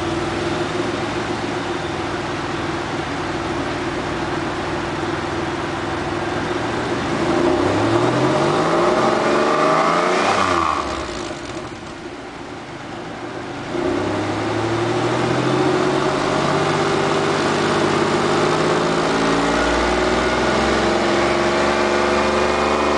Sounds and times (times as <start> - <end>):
Heavy engine (low frequency): 0.0 - 22.9
Vehicle: 0.0 - 22.9.